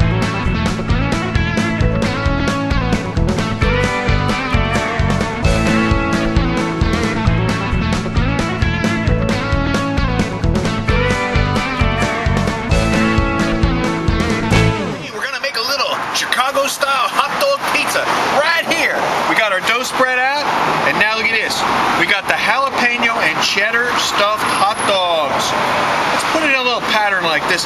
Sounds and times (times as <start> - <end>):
Music: 0.0 - 15.1
Speech: 15.0 - 25.6, 26.2 - 27.6.